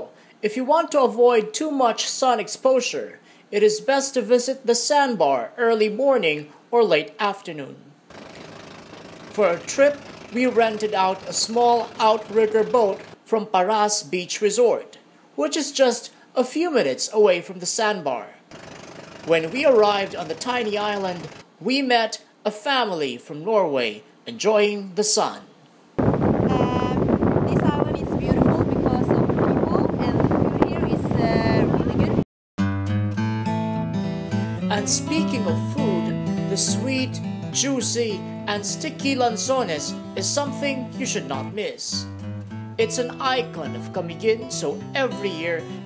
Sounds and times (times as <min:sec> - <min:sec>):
Speech: 0:00.0 - 0:07.8, 0:09.4 - 0:18.4, 0:19.3 - 0:25.5, 0:26.5 - 0:32.2, 0:34.7 - 0:42.1, 0:42.8 - 0:45.7.